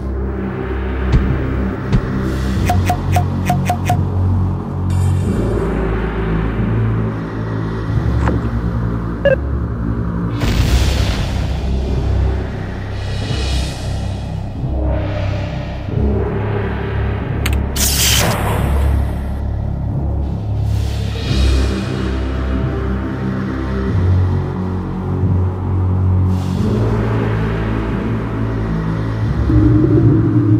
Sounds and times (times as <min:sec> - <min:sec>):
Scary music: 0:00.0 - 0:30.5.